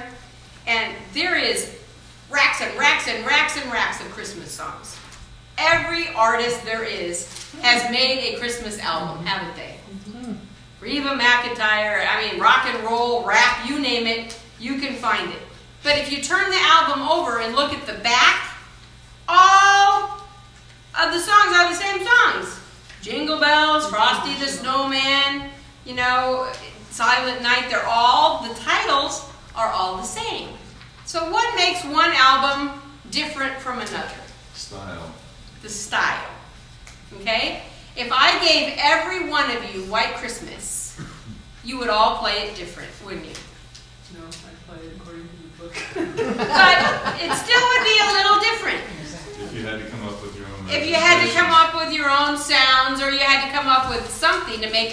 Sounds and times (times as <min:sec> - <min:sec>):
Speech: 0:05.6 - 0:18.5, 0:21.0 - 0:36.3, 0:37.2 - 0:40.8, 0:44.1 - 0:45.8, 0:46.6 - 0:54.9.